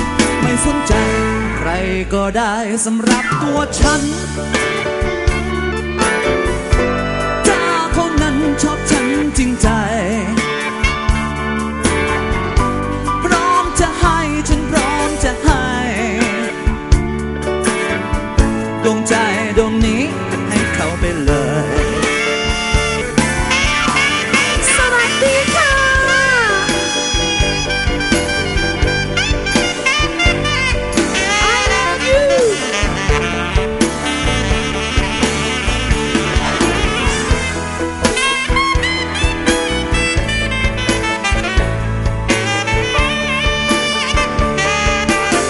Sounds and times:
Pop music: 0.0s - 45.4s.

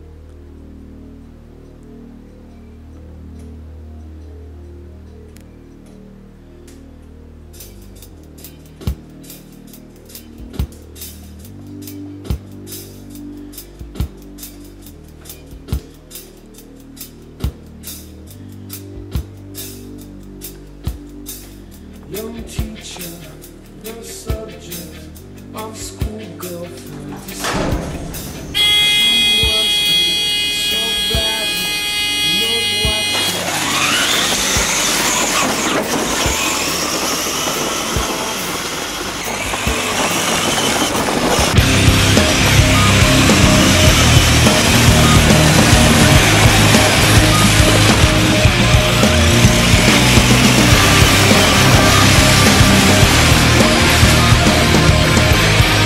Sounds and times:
Music: 0.0s - 55.8s.

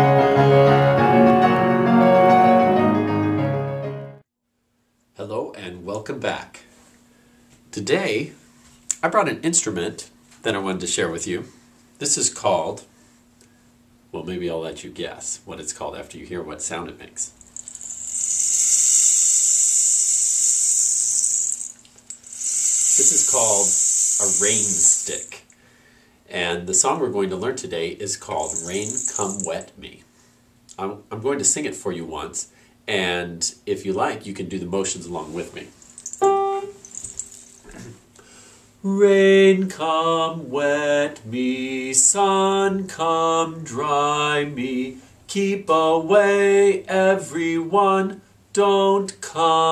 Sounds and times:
Speech: 5.2s - 6.7s, 7.7s - 8.4s, 9.0s - 12.9s, 14.2s - 17.4s, 23.0s - 25.4s, 26.3s - 30.0s, 30.7s - 35.7s.

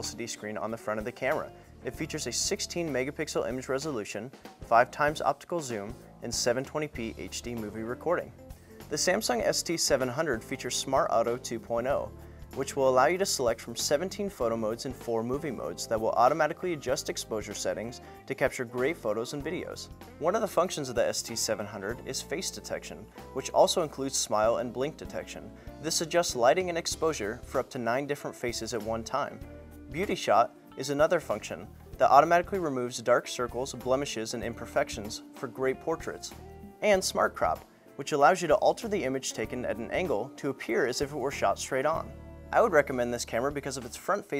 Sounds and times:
Music: 0.0s - 44.3s
Speech: 0.0s - 44.3s.

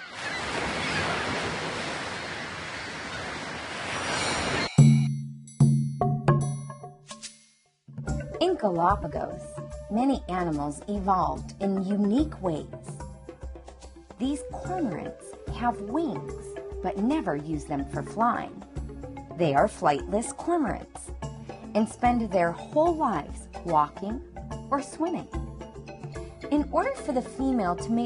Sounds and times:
Music: 4.8s - 28.0s
Speech: 8.4s - 12.8s, 14.2s - 18.6s, 19.4s - 21.1s, 21.8s - 25.3s, 26.5s - 28.0s.

